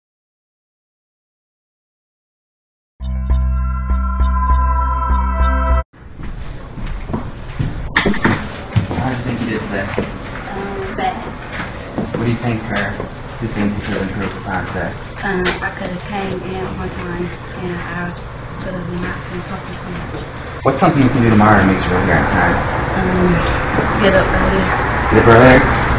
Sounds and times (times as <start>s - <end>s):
Music: 3.0s - 5.8s.